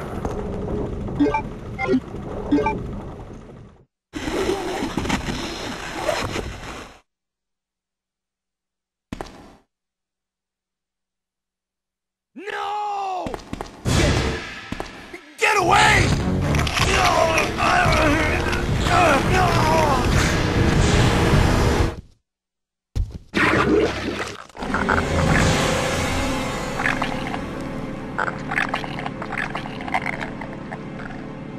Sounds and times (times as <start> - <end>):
Speech: 12.4 - 14.3, 15.2 - 16.2, 16.8 - 20.1
Music: 15.6 - 22.0, 24.6 - 31.5.